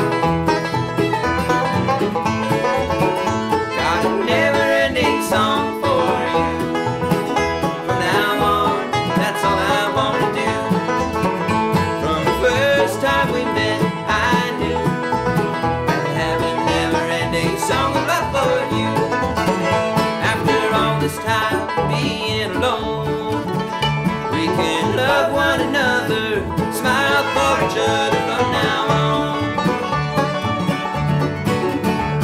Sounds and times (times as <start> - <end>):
Banjo: 0.0 - 32.2.